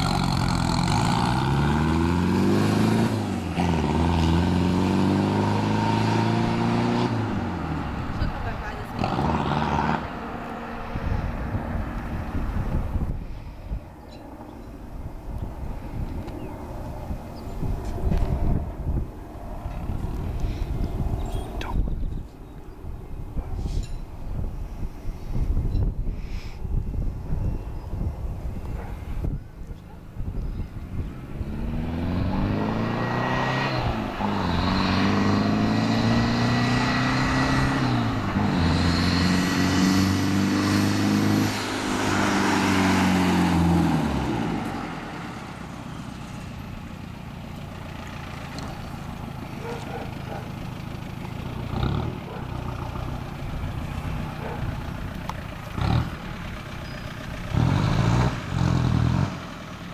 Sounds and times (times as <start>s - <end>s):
Engine: 0.0s - 59.9s
Outside, urban or manmade: 0.0s - 59.9s
Truck: 0.0s - 59.9s
Speech: 8.2s - 9.2s.